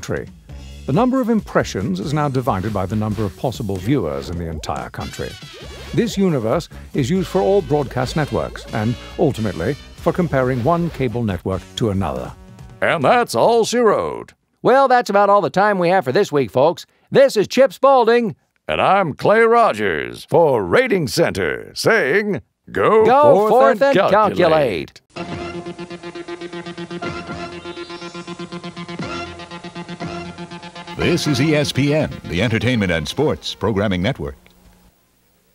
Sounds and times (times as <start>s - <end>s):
Speech synthesizer: 0.9s - 5.4s, 6.0s - 25.0s, 31.0s - 34.4s
Television: 4.5s - 9.8s, 22.7s - 25.0s, 31.0s - 35.5s.